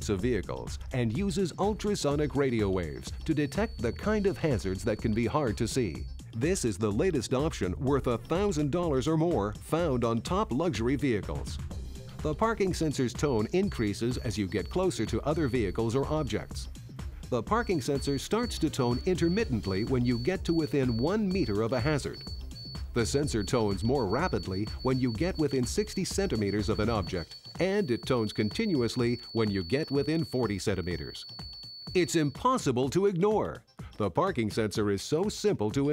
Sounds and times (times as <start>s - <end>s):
Speech: 0.0s - 11.6s, 12.3s - 16.7s, 17.4s - 22.2s, 23.0s - 31.2s, 32.0s - 35.9s
Music: 0.0s - 35.9s.